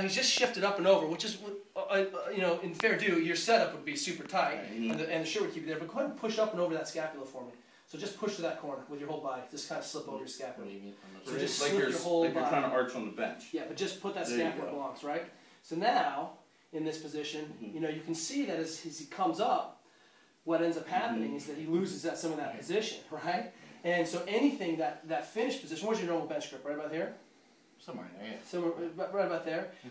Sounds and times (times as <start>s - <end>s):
Speech: 0.0s - 19.8s, 20.5s - 27.2s, 27.8s - 29.9s.